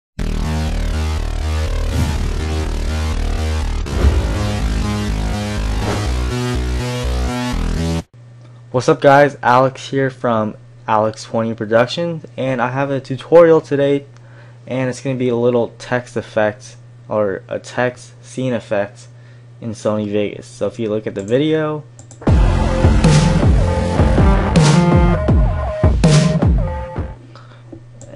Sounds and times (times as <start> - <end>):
Music: 0.2 - 8.1, 22.2 - 27.2
Speech: 8.7 - 14.1, 14.7 - 21.9.